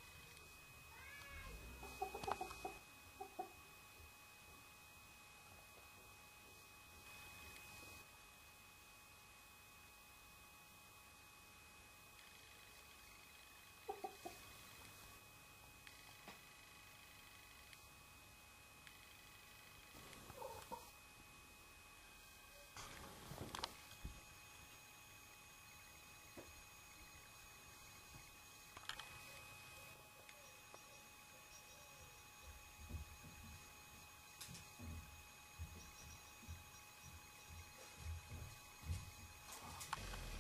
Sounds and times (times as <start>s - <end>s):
Chicken, rooster: 1.2s - 3.6s, 13.8s - 14.5s, 20.3s - 21.0s.